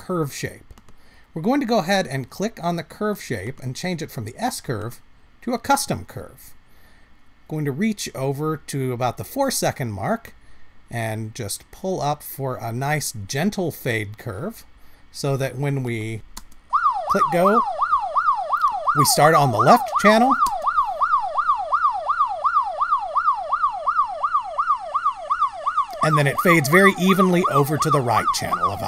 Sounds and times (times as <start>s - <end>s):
Ambulance (siren): 16.7s - 28.8s.